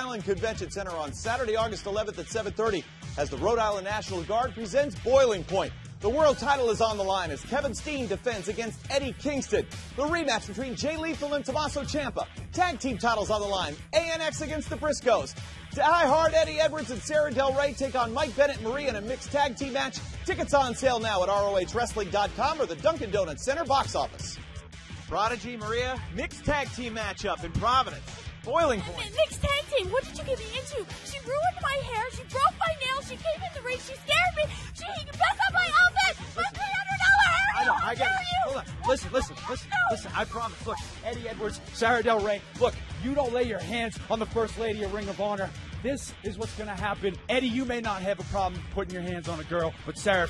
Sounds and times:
Music: 0:00.0 - 0:50.3.

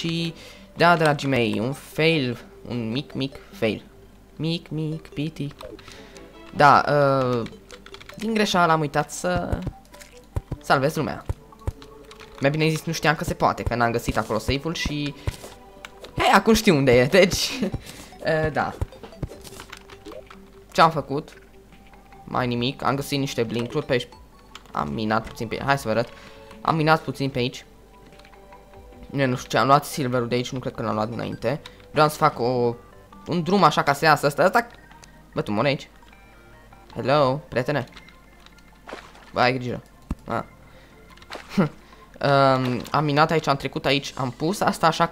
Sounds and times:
Speech: 0:00.0 - 0:03.8, 0:04.4 - 0:05.6, 0:06.6 - 0:07.5, 0:08.2 - 0:09.7, 0:10.6 - 0:11.3, 0:12.4 - 0:15.2, 0:16.2 - 0:18.8, 0:20.8 - 0:21.4, 0:22.3 - 0:24.1, 0:24.7 - 0:27.7, 0:29.1 - 0:34.7, 0:35.4 - 0:35.9, 0:37.0 - 0:37.9, 0:39.4 - 0:40.5, 0:42.2 - 0:45.1.

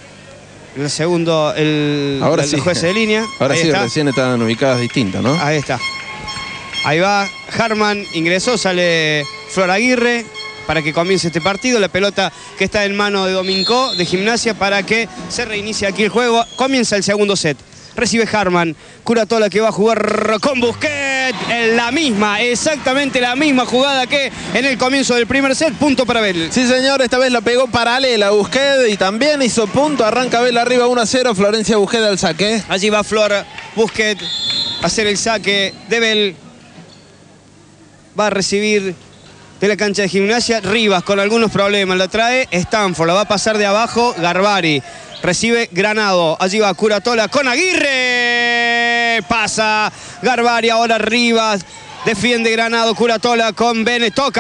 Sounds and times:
Speech: 0:00.8 - 0:05.8, 0:06.9 - 0:36.8, 0:39.6 - 0:54.4.

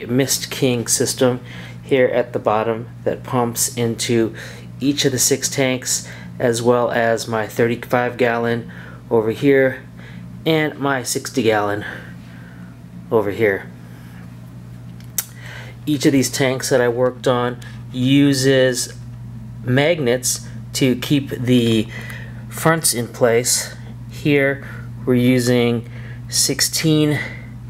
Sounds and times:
Speech: 0:00.0 - 0:12.1, 0:13.1 - 0:13.8, 0:15.9 - 0:19.0, 0:19.7 - 0:21.9, 0:22.5 - 0:27.4.

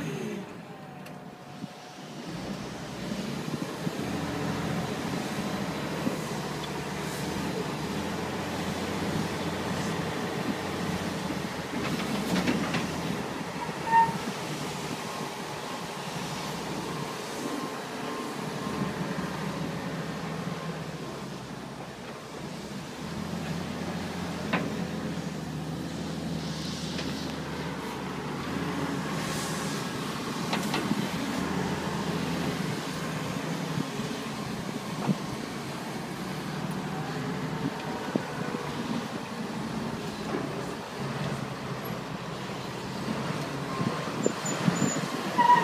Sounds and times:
Outside, rural or natural: 0:00.0 - 0:45.6
Vehicle: 0:00.0 - 0:45.6.

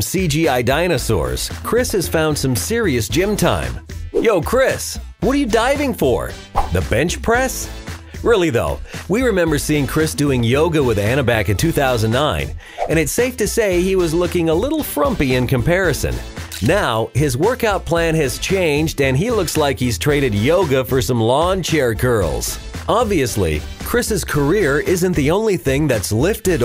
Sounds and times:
Music: 0:00.0 - 0:26.6
Speech: 0:00.0 - 0:26.6.

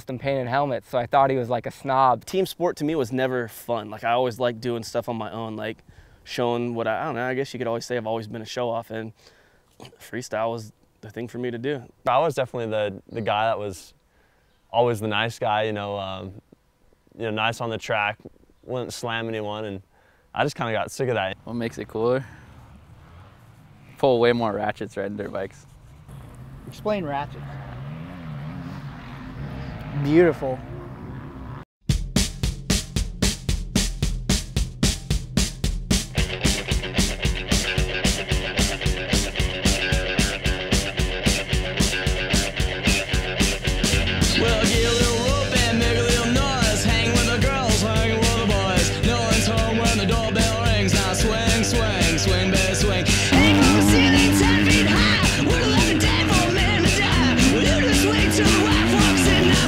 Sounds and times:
Vehicle: 0:21.4 - 0:31.7, 0:53.1 - 0:59.6.

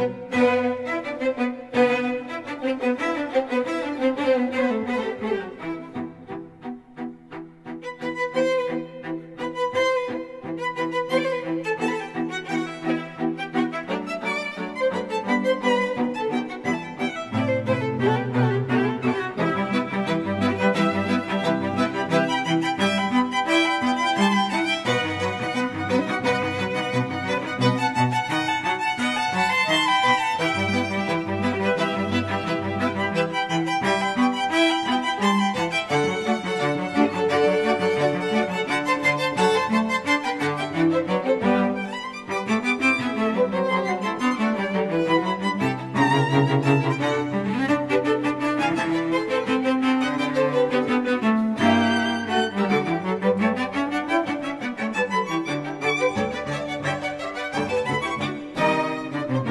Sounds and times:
Classical music: 0:00.0 - 0:59.5.

